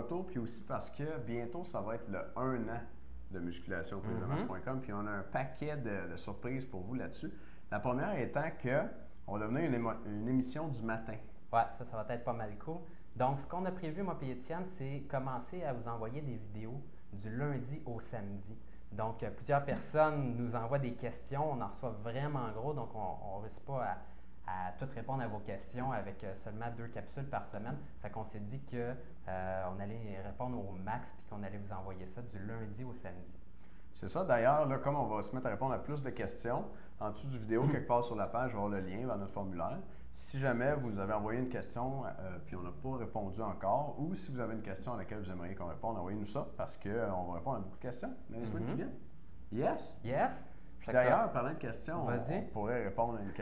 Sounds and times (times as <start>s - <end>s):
Speech: 0.0s - 33.4s, 34.0s - 53.4s.